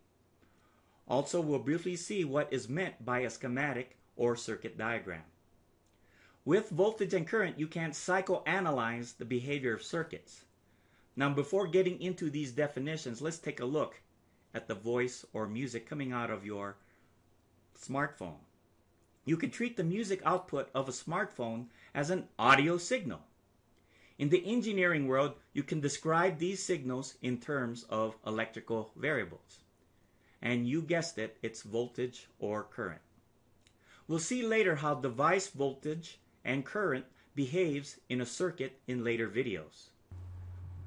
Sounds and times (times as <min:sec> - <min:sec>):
Speech: 0:01.1 - 0:05.4, 0:06.4 - 0:10.5, 0:11.2 - 0:16.8, 0:17.8 - 0:18.5, 0:19.2 - 0:23.3, 0:24.2 - 0:29.7, 0:30.4 - 0:33.1, 0:34.1 - 0:40.0.